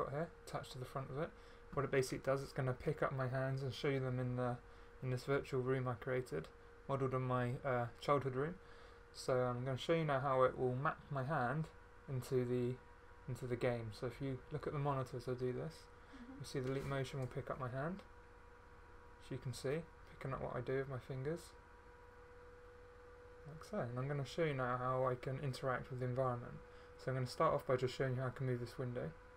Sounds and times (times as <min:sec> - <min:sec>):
Speech: 0:00.0 - 0:08.6, 0:09.2 - 0:18.1, 0:19.2 - 0:21.6, 0:23.4 - 0:29.2.